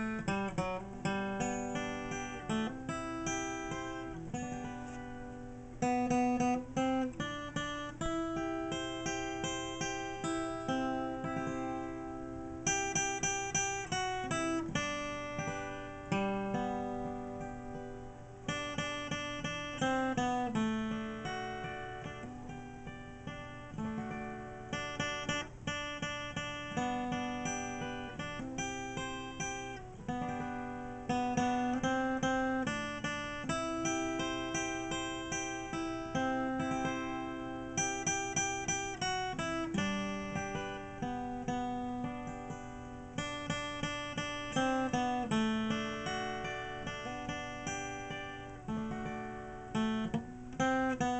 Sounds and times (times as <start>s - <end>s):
Acoustic guitar: 0.0s - 51.1s
Strum: 0.0s - 51.1s.